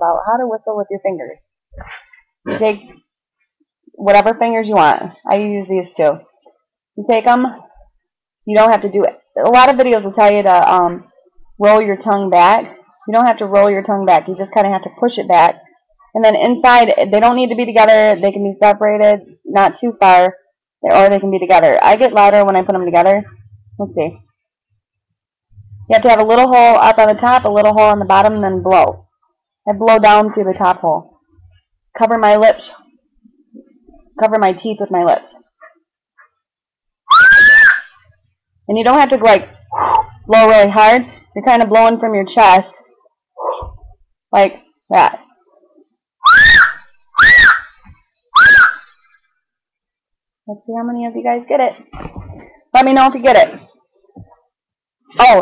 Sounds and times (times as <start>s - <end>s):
Speech: 0.0s - 2.9s, 4.0s - 6.2s, 7.0s - 7.7s, 8.5s - 11.0s, 11.6s - 15.6s, 16.2s - 24.2s, 25.8s - 29.0s, 29.7s - 31.0s, 32.0s - 32.8s, 33.6s - 35.3s, 38.7s - 42.8s, 43.4s - 45.2s, 50.5s - 53.6s, 55.2s - 55.4s.